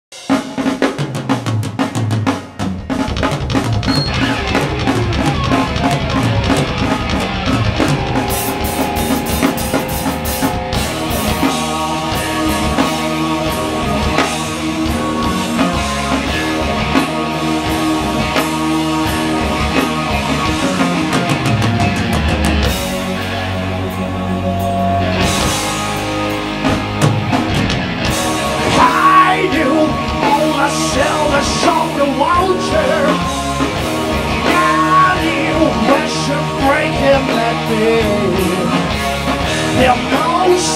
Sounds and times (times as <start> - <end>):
Drum roll: 0.1 - 24.0, 24.6 - 40.7
Drum kit: 0.1 - 40.7.